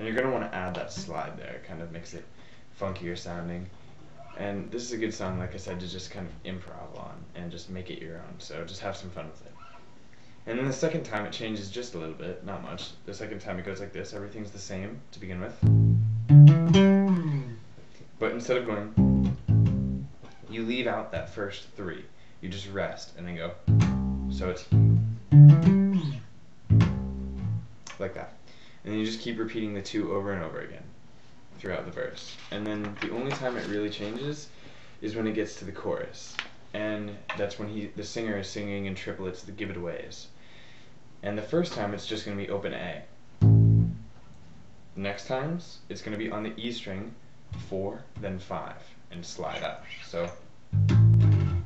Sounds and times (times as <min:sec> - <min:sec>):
Speech: 0:00.0 - 0:09.6, 0:10.4 - 0:15.7, 0:18.2 - 0:19.0, 0:20.4 - 0:23.7, 0:24.3 - 0:24.9, 0:27.9 - 0:31.0, 0:31.6 - 0:40.4, 0:41.2 - 0:43.2, 0:45.0 - 0:50.5
Bass guitar: 0:15.6 - 0:17.6, 0:18.8 - 0:20.2, 0:23.6 - 0:27.9, 0:43.4 - 0:44.2, 0:50.7 - 0:51.6.